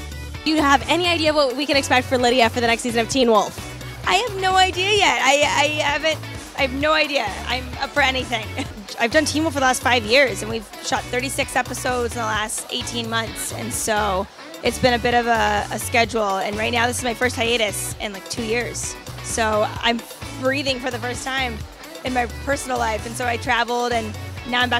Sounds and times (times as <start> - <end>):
Music: 0.0 - 24.7
Speech: 0.5 - 24.7.